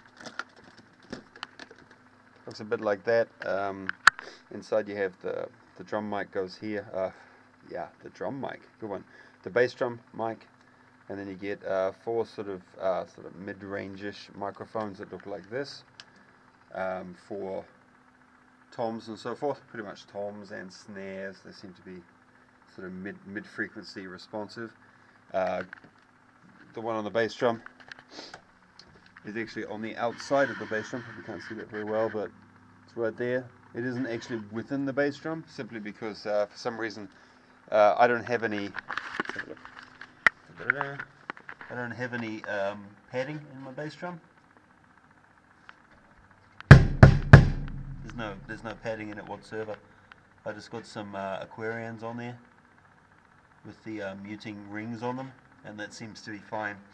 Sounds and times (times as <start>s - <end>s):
Speech: 2.4s - 3.9s, 4.5s - 10.5s, 11.1s - 15.9s, 16.7s - 17.8s, 18.7s - 22.1s, 22.7s - 25.7s, 26.6s - 27.7s, 29.2s - 38.8s, 40.5s - 41.1s, 41.7s - 44.3s, 48.0s - 49.8s, 50.4s - 52.5s, 53.6s - 56.9s.